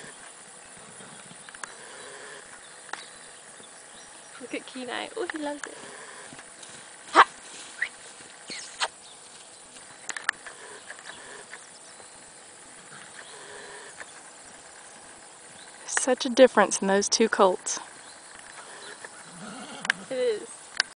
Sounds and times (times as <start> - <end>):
Speech: 4.4 - 5.8, 20.1 - 20.5
Neigh, whinny: 18.6 - 20.2.